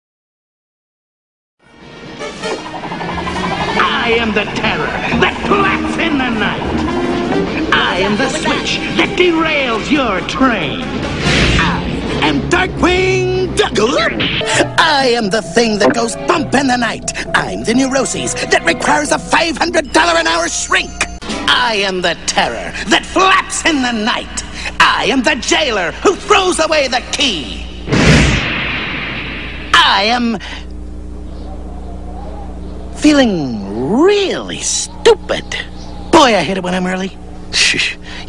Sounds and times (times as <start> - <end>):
Music: 1.6 - 21.9
Speech: 3.8 - 6.7, 7.7 - 10.9, 11.6 - 27.6, 29.8 - 30.5, 33.0 - 38.0.